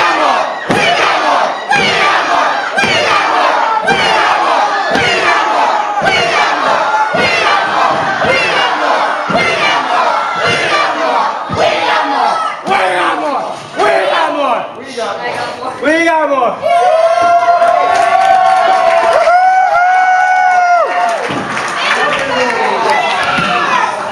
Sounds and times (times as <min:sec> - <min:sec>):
Speech: 0:12.0 - 0:16.6.